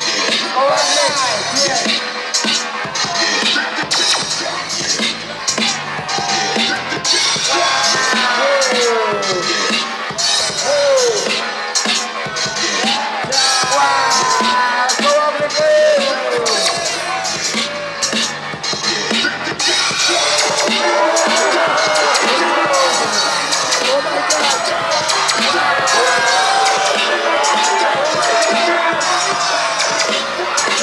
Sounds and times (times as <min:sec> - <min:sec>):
Music: 0:00.0 - 0:30.8
Speech: 0:00.5 - 0:01.9, 0:13.3 - 0:17.0, 0:23.8 - 0:24.8.